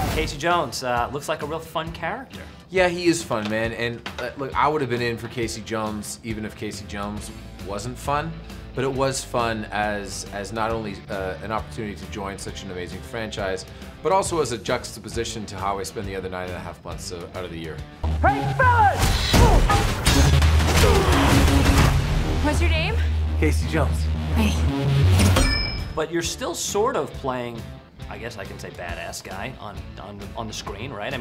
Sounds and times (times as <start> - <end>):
Music: 0.0 - 31.2.